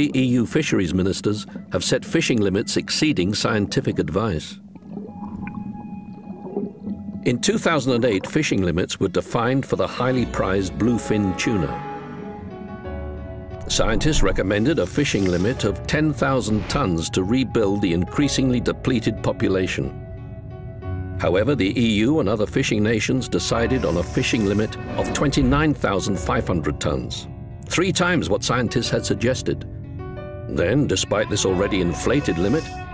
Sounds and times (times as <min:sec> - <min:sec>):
Speech: 0:00.0 - 0:04.6, 0:07.3 - 0:11.8, 0:13.6 - 0:19.9, 0:21.2 - 0:29.6, 0:30.5 - 0:32.8
Music: 0:00.0 - 0:32.9.